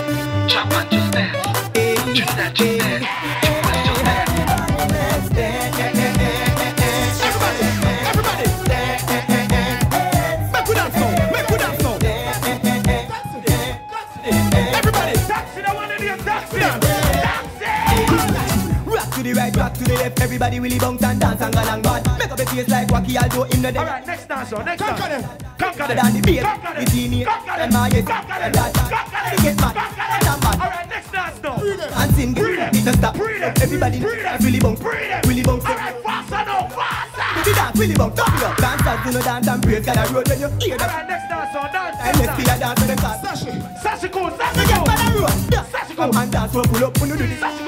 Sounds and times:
Hip hop music: 0.0 - 47.6
Reggae: 0.0 - 47.6.

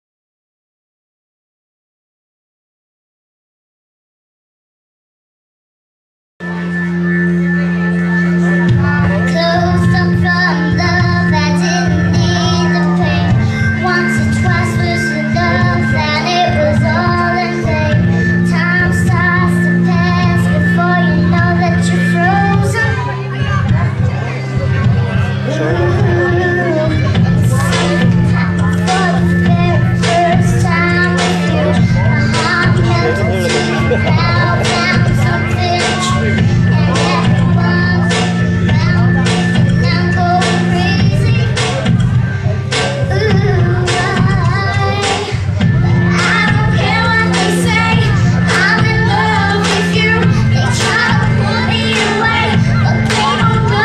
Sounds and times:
Music: 6.4 - 53.8
Child singing: 8.2 - 53.8
Female singing: 8.4 - 41.8, 42.8 - 53.8.

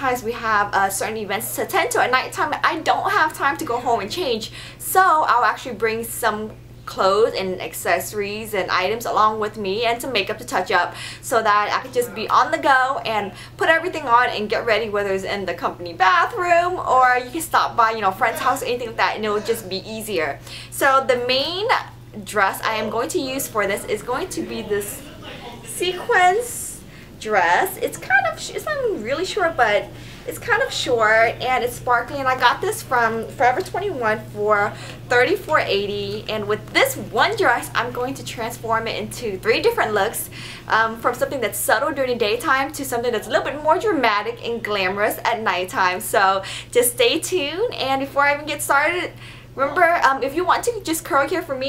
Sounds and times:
Inside, small room: 0.0 - 51.6
Speech: 0.0 - 51.6.

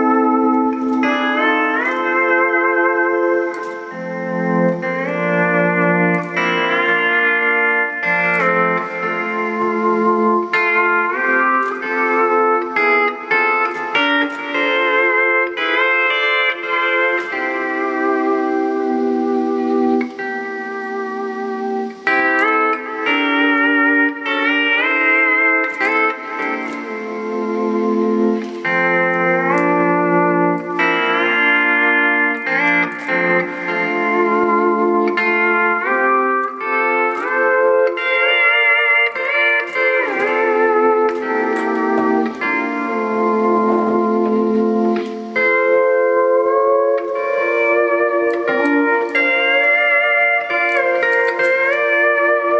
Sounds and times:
Hammond organ: 0.0 - 52.5
Steel guitar, slide guitar: 0.0 - 52.5.

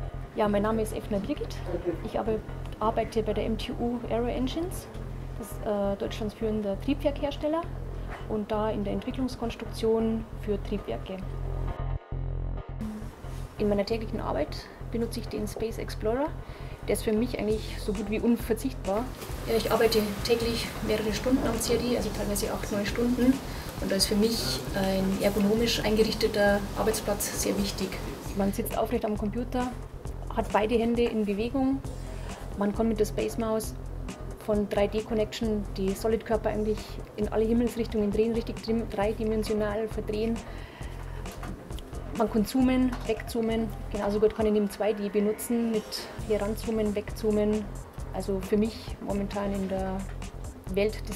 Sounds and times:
Music: 0.0 - 51.1
Speech: 0.4 - 7.7, 8.3 - 11.2, 12.8 - 31.9, 32.6 - 33.8, 34.4 - 40.4, 42.2 - 50.1, 50.7 - 51.1.

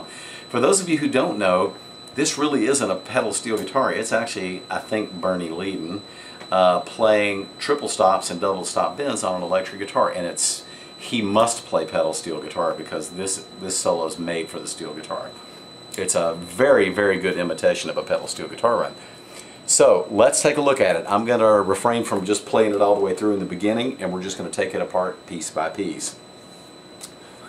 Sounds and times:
Speech: 0.0 - 15.4, 16.0 - 19.0, 19.7 - 26.2.

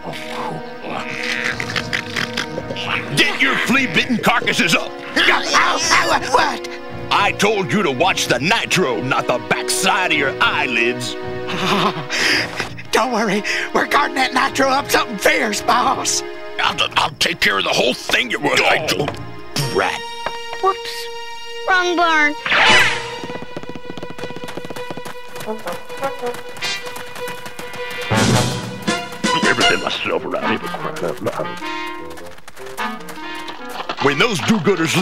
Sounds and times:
Music: 0.0 - 35.0
Speech: 3.2 - 11.0, 29.4 - 31.6, 34.0 - 35.0.

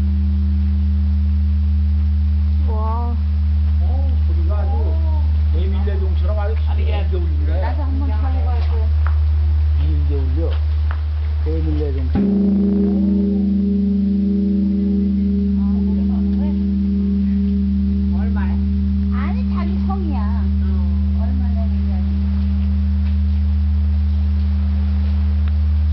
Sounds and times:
Speech: 2.6 - 3.2, 3.8 - 8.9, 9.8 - 10.6, 11.4 - 12.2, 18.2 - 22.1.

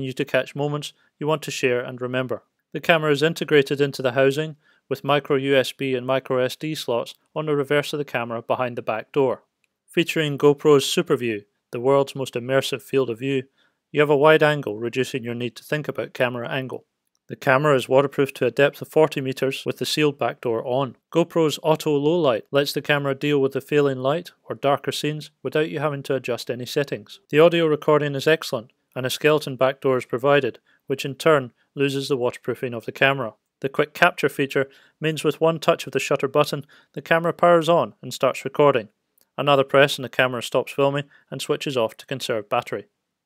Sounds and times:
Speech: 0.0 - 42.9.

